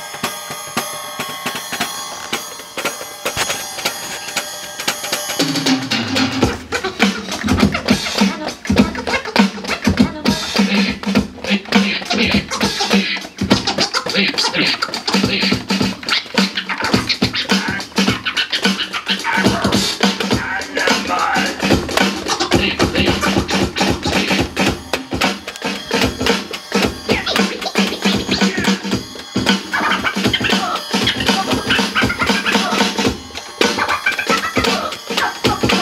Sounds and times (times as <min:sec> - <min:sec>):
Drum machine: 0:00.0 - 0:35.8
Scratching (performance technique): 0:00.0 - 0:35.8.